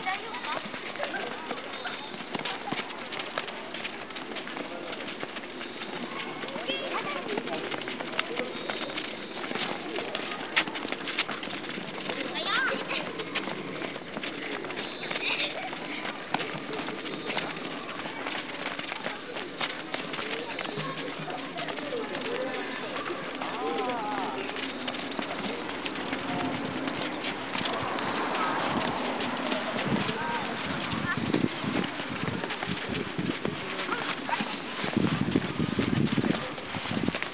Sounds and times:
Speech: 0.0s - 11.1s, 12.0s - 37.0s.

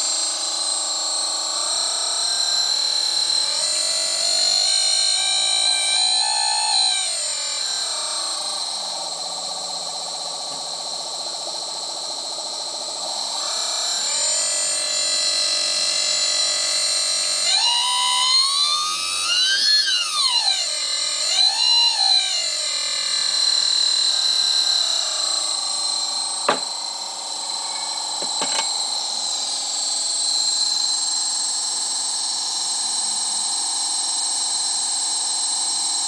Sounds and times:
Pump (liquid): 0.0s - 36.0s.

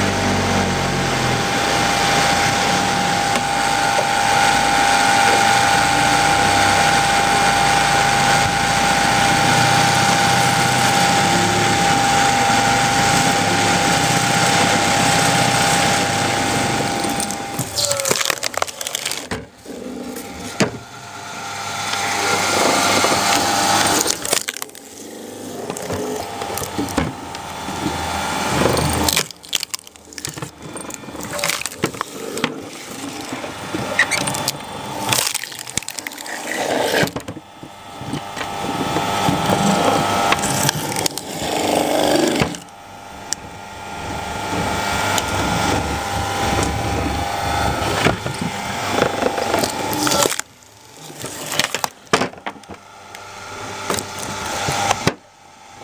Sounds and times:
Wood: 0.1s - 55.3s.

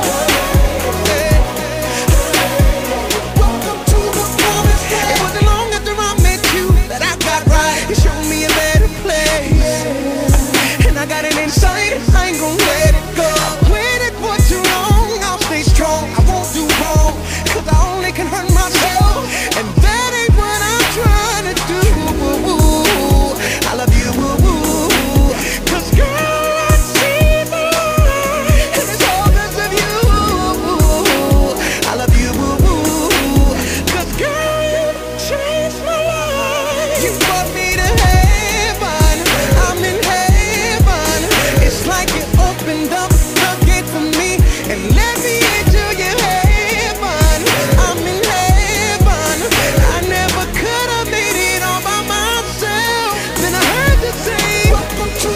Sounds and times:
Music: 0.0s - 55.3s.

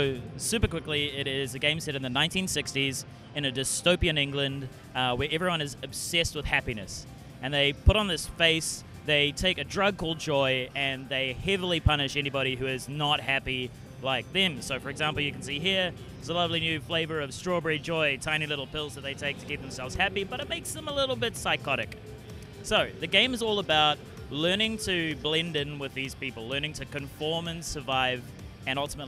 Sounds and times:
Speech: 0.0s - 22.0s, 22.6s - 29.0s
Music: 0.0s - 29.0s.

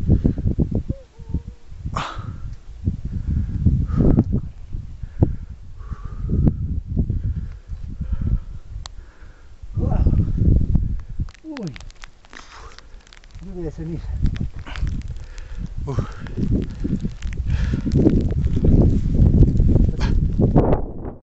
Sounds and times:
Eruption: 0.0s - 21.2s
Speech: 13.4s - 14.2s.

